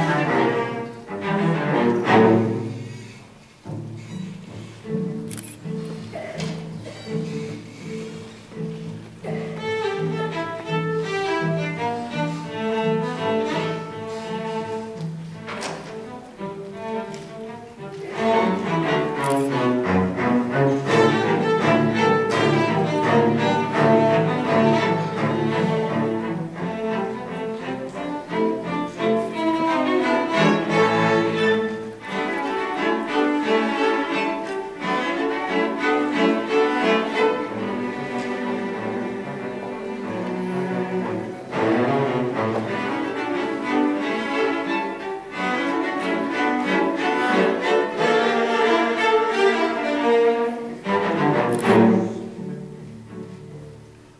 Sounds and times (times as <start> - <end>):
Cello: 0.0 - 54.1.